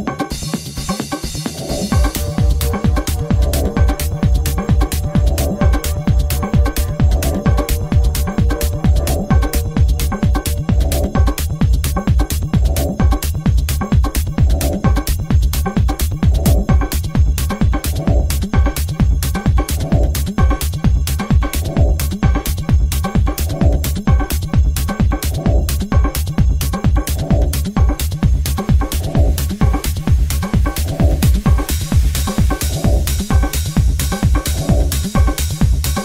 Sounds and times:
Techno: 0.0 - 36.0.

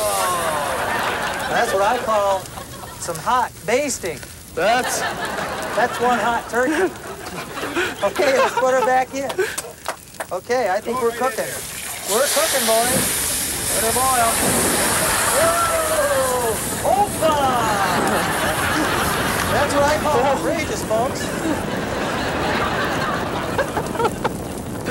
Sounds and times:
Speech: 8.0 - 9.4, 10.3 - 13.0, 13.7 - 14.4, 19.5 - 21.3.

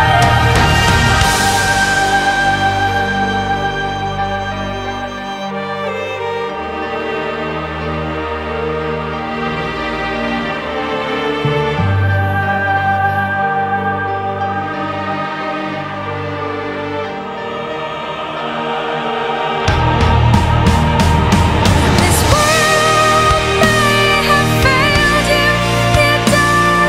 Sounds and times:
Theme music: 0.0 - 26.8.

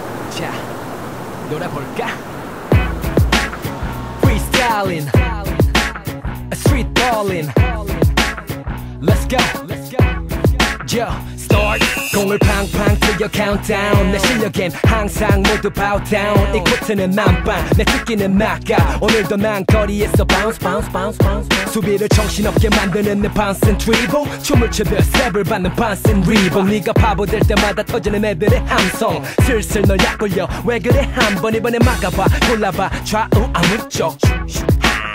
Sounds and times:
Music: 2.7 - 35.1.

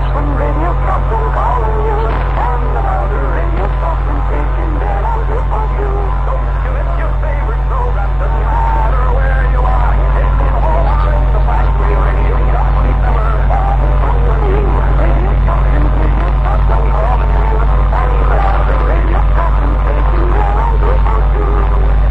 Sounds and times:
Radio: 0.0 - 22.1.

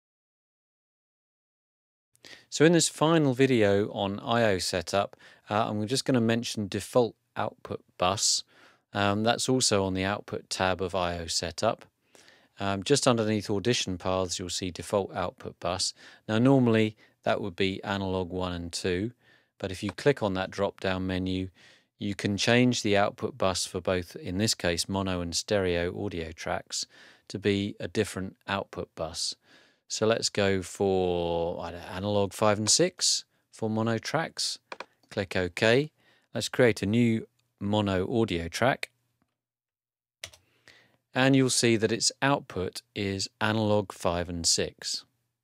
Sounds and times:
Speech: 2.5 - 11.9, 12.6 - 39.0, 41.1 - 45.1.

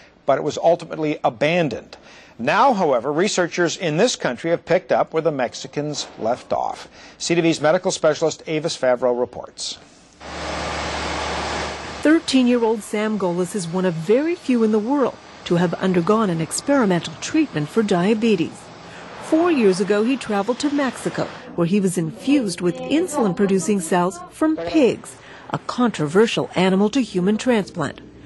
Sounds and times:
Speech: 0.3 - 9.8, 12.1 - 18.6, 19.3 - 28.0.

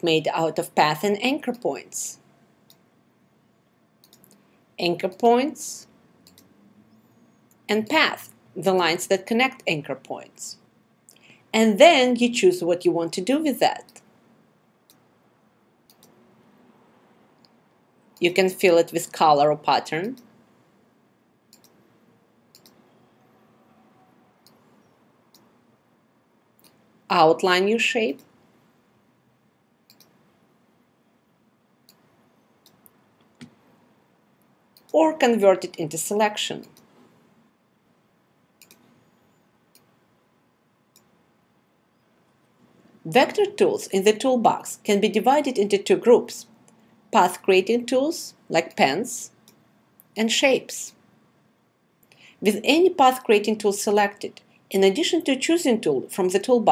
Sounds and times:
Speech: 0.0 - 2.2, 4.8 - 5.9, 7.7 - 10.6, 11.6 - 14.0, 18.2 - 20.2, 27.1 - 28.3, 34.9 - 36.8, 43.1 - 46.5, 47.2 - 49.4, 50.2 - 51.0, 52.4 - 56.7.

